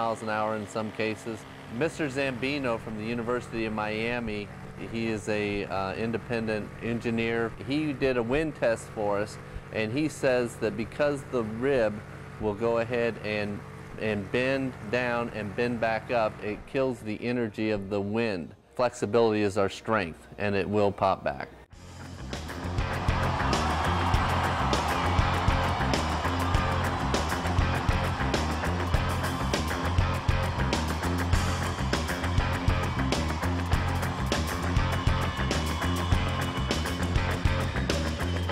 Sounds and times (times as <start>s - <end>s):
Speech: 0.0s - 21.6s.